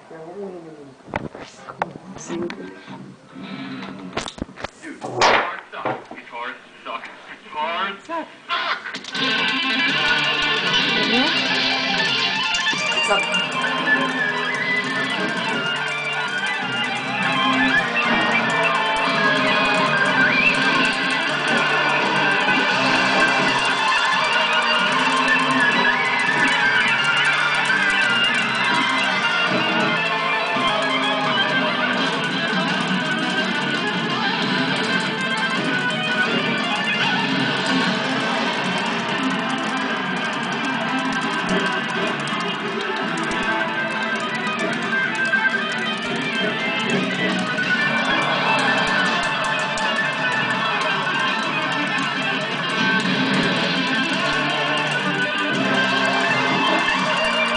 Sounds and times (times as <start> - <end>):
Music: 0.0 - 57.5.